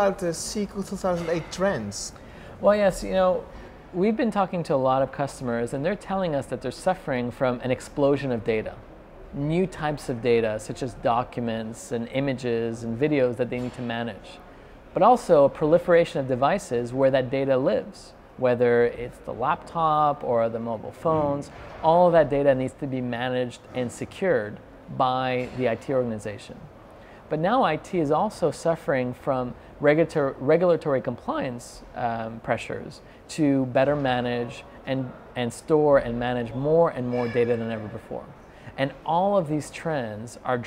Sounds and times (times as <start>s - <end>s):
Speech: 27.4s - 40.6s.